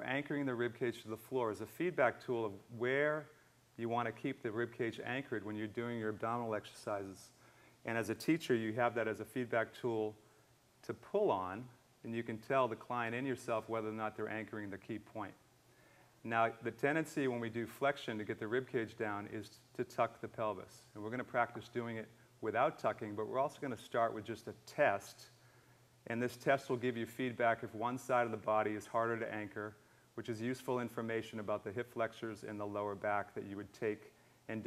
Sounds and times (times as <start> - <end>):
Speech: 0.0 - 10.2, 10.8 - 15.4, 16.2 - 25.4, 26.1 - 34.6.